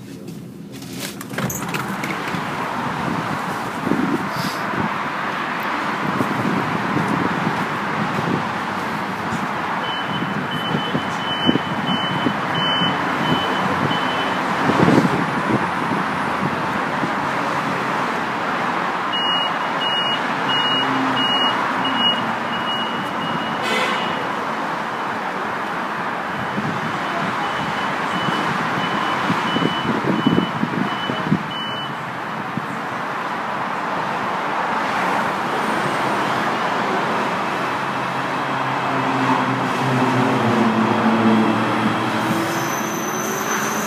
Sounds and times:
Outside, urban or manmade: 0.0s - 43.8s
Subway, metro, underground: 0.0s - 43.8s
Train: 0.0s - 43.8s.

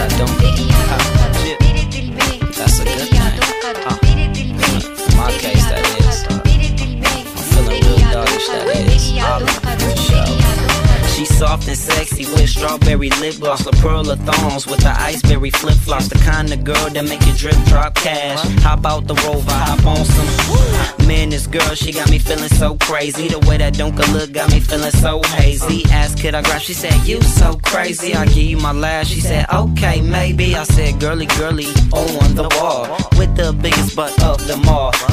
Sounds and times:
Hip hop music: 0.0s - 35.1s
Rhythm and blues: 0.0s - 35.1s.

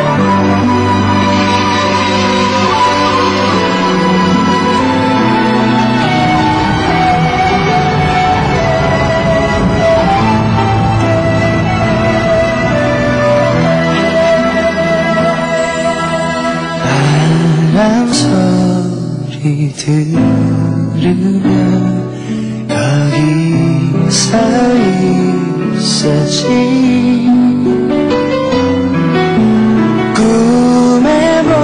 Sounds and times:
Music: 0.0s - 31.6s.

